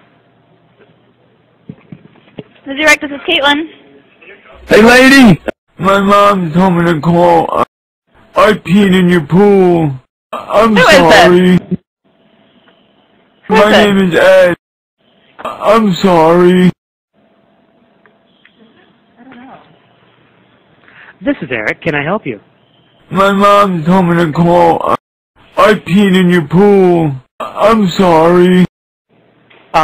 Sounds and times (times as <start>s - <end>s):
Speech: 3.3s - 7.7s, 8.4s - 11.8s, 15.4s - 16.8s, 23.1s - 25.0s, 25.6s - 28.7s.